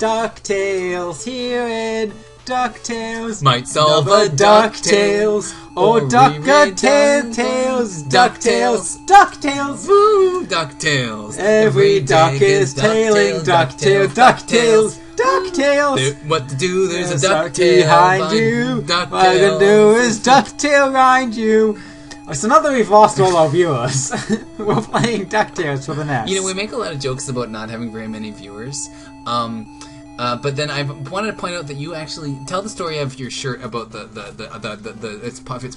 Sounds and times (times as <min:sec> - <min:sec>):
Speech: 0:05.8 - 0:35.7.